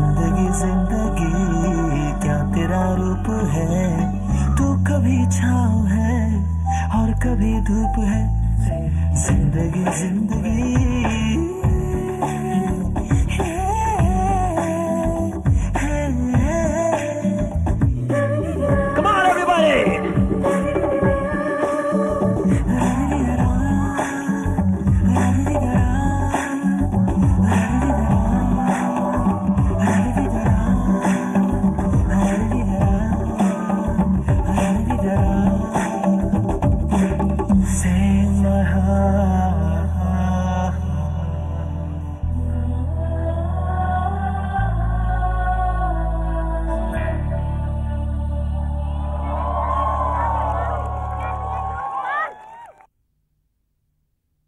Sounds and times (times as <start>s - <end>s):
Singing: 0.0s - 8.2s, 9.2s - 52.3s
Music: 0.0s - 51.3s
Inside, large room or hall: 7.4s - 52.8s.